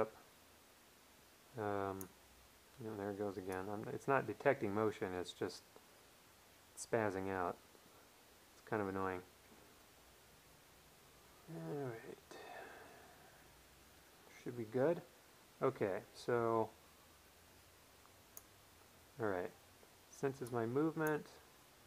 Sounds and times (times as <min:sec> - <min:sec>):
Speech: 0:01.6 - 0:02.1, 0:02.8 - 0:05.7, 0:06.8 - 0:07.6, 0:08.6 - 0:09.3, 0:11.5 - 0:12.4, 0:14.3 - 0:16.8, 0:19.2 - 0:21.4.